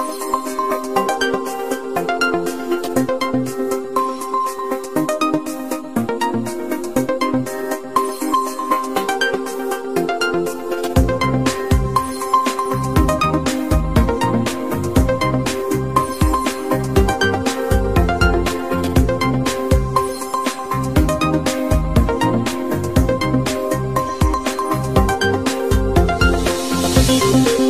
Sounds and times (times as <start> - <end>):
Music: 0.0 - 27.6.